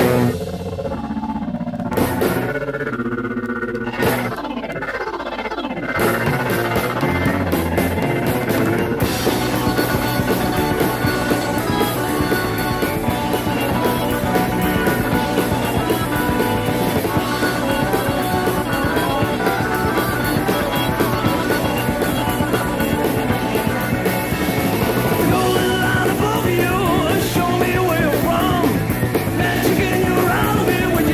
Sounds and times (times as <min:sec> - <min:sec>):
Music: 0:00.0 - 0:31.1.